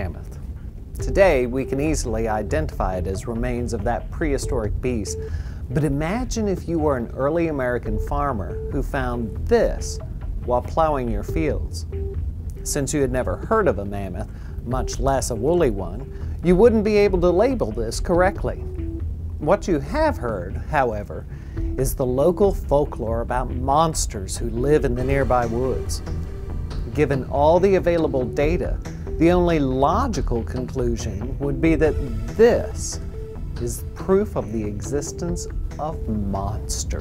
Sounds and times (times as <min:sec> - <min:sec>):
Speech: 0:00.0 - 0:00.4, 0:01.0 - 0:11.8, 0:12.6 - 0:18.6, 0:19.4 - 0:21.2, 0:21.8 - 0:26.0, 0:26.9 - 0:33.0, 0:33.6 - 0:37.0
Music: 0:00.0 - 0:37.0.